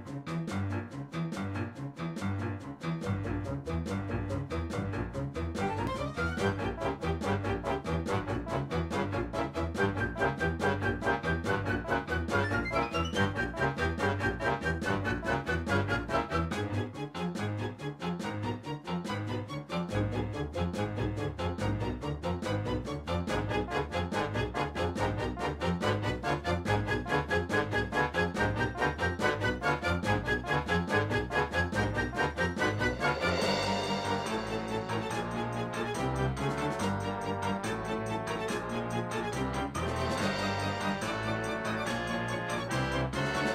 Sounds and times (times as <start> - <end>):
Music: 0.0 - 43.5.